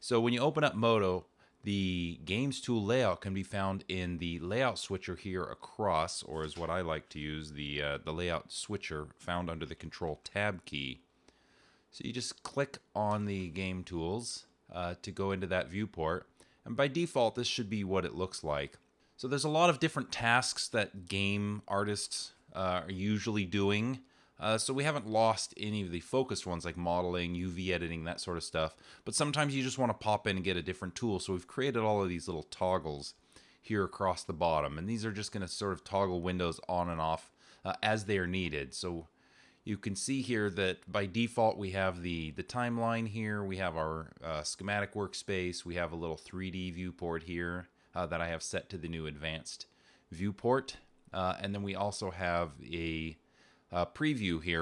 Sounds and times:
Speech: 0:00.0 - 0:11.1, 0:11.9 - 0:54.6.

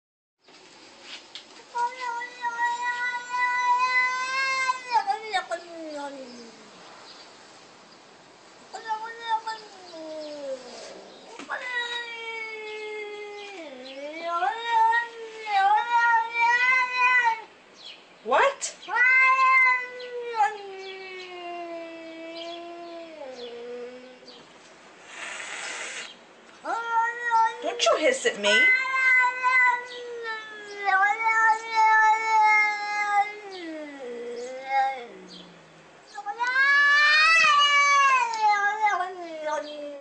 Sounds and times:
Caterwaul: 0:01.8 - 0:06.7, 0:08.8 - 0:17.5, 0:18.8 - 0:24.3, 0:25.1 - 0:27.9, 0:28.5 - 0:40.0.

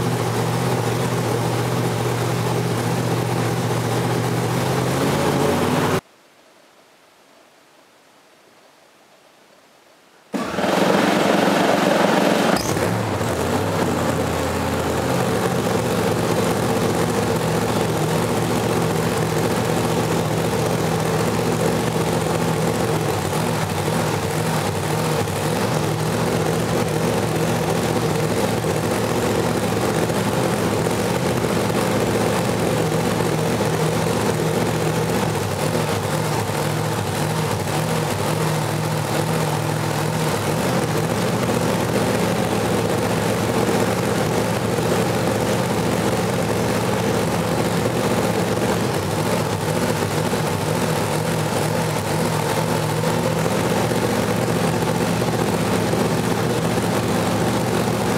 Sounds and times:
Engine: 0:00.0 - 0:06.0, 0:10.3 - 0:58.1
Vehicle: 0:00.0 - 0:06.0, 0:10.4 - 0:58.1.

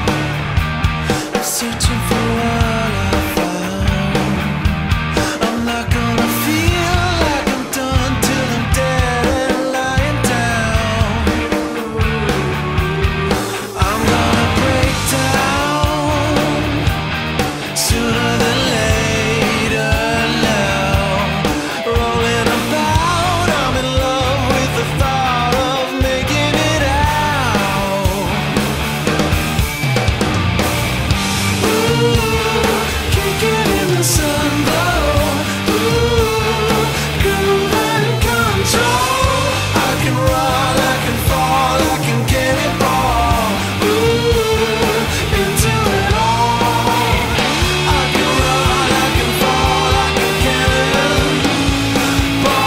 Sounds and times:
Rock music: 0:00.0 - 0:52.6.

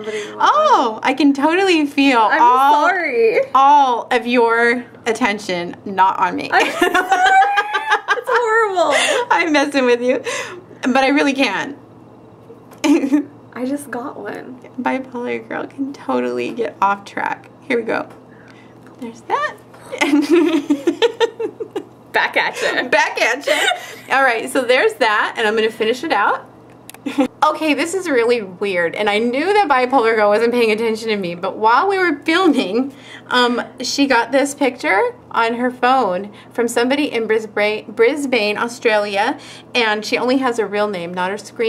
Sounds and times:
Inside, small room: 0:00.0 - 0:41.6.

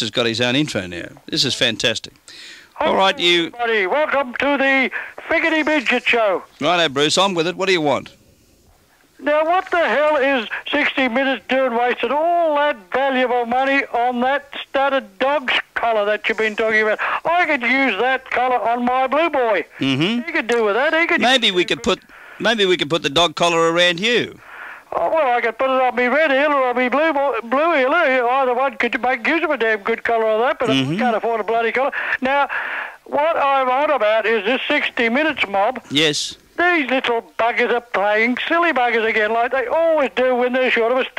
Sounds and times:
Speech: 0:00.0 - 0:02.2, 0:02.8 - 0:08.2, 0:09.2 - 0:32.5, 0:33.1 - 0:41.1.

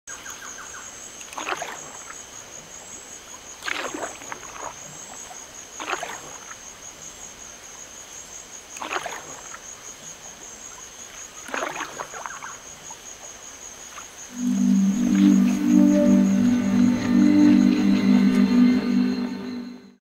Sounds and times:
Boat, Water vehicle: 0:00.2 - 0:17.8
Music: 0:14.3 - 0:20.0.

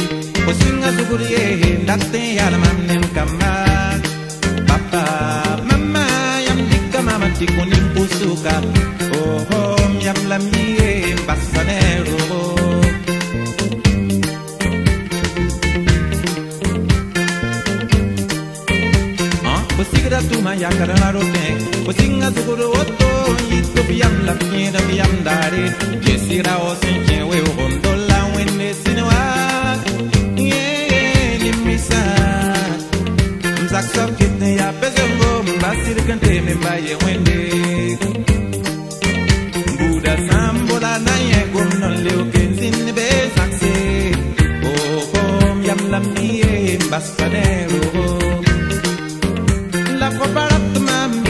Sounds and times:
Music: 0:00.0 - 0:51.2.

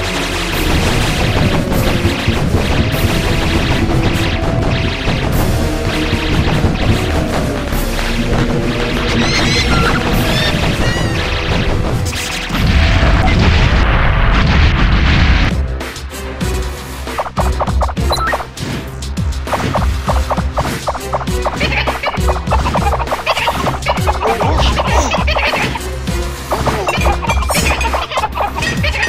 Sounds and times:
Music: 0:00.0 - 0:29.0.

